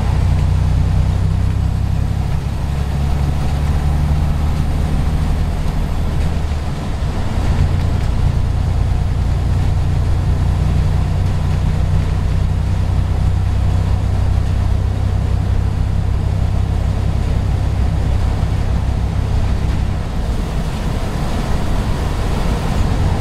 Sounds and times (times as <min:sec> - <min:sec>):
Vehicle: 0:00.0 - 0:23.2.